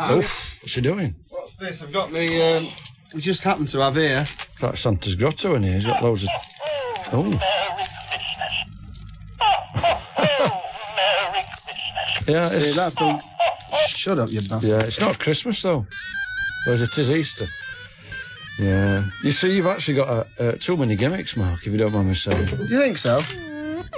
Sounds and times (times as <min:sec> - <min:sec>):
Speech: 0:12.3 - 0:13.2, 0:18.6 - 0:23.3
Music: 0:16.0 - 0:23.1.